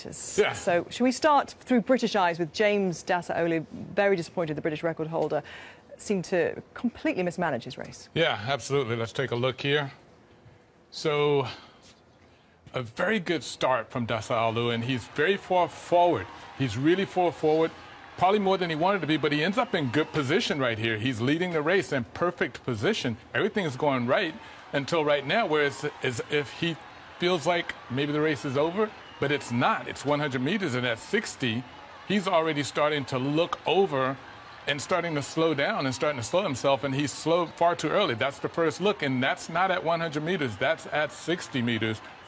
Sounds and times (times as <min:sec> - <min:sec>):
Speech: 0:12.8 - 0:42.0.